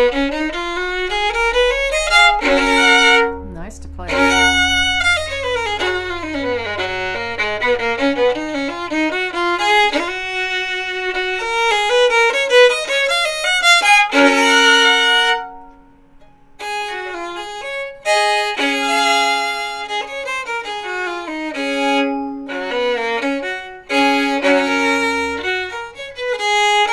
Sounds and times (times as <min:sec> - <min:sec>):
Violin, fiddle: 0:00.0 - 0:03.4, 0:04.0 - 0:15.8, 0:16.6 - 0:26.9.